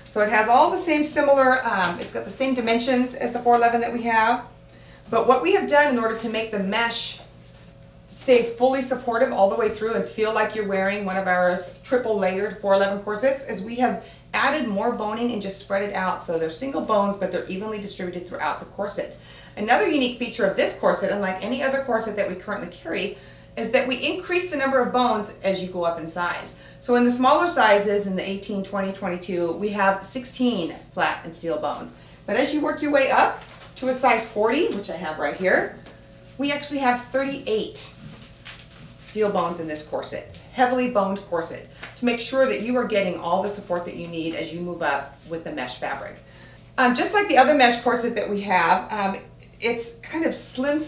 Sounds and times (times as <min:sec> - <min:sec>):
Speech: 0:00.1 - 0:04.5, 0:05.1 - 0:07.3, 0:08.2 - 0:35.8, 0:36.4 - 0:38.0, 0:39.0 - 0:46.2, 0:46.8 - 0:50.8.